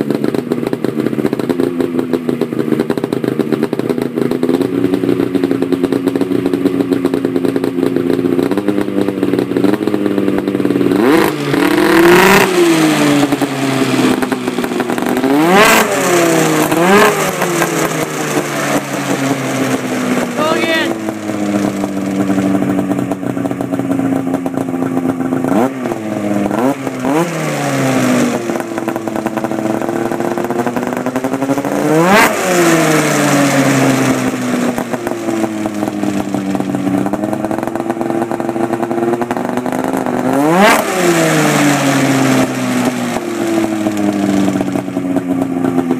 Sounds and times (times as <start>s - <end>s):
Motorcycle: 0.0s - 45.9s.